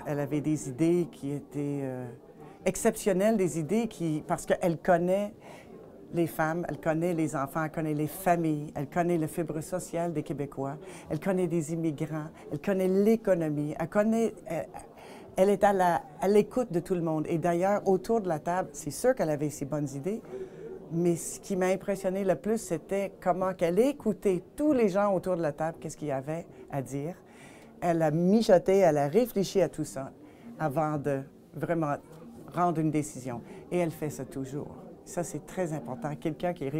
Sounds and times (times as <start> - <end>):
Speech: 0.0 - 36.7.